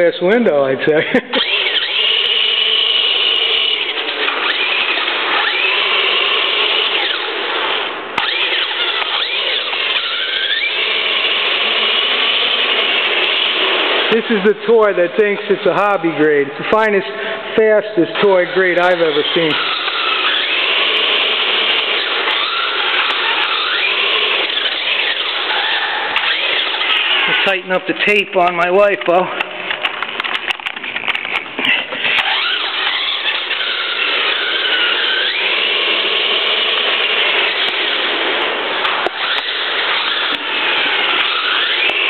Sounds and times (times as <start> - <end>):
Speech: 0.0 - 1.1, 14.1 - 19.6, 27.3 - 29.4
Inside, large room or hall: 0.0 - 42.0
Race car, auto racing: 0.3 - 28.3, 29.1 - 42.0.